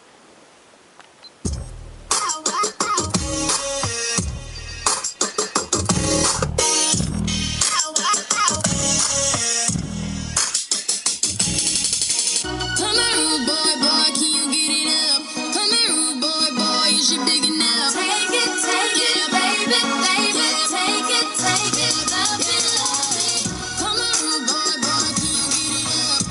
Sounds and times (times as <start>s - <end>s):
Music: 1.5s - 26.3s.